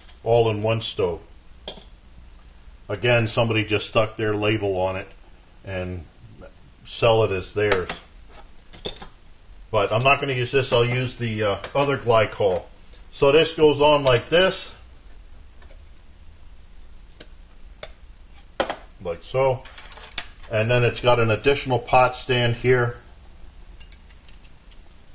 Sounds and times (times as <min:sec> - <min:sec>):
Speech: 0:00.3 - 0:01.3, 0:02.9 - 0:08.1, 0:09.8 - 0:14.8, 0:19.0 - 0:19.7, 0:20.5 - 0:23.0.